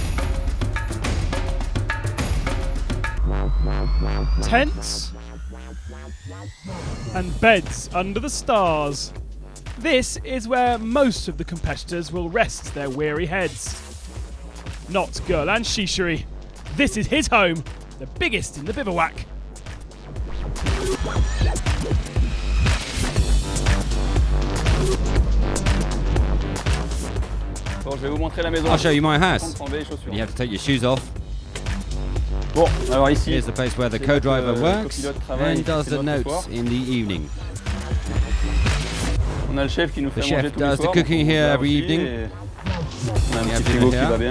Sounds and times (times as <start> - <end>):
Music: 0.0 - 44.3
Speech: 4.4 - 5.1, 6.7 - 9.2, 9.8 - 13.8, 14.9 - 19.2, 27.8 - 31.1, 32.6 - 37.3, 39.5 - 44.3.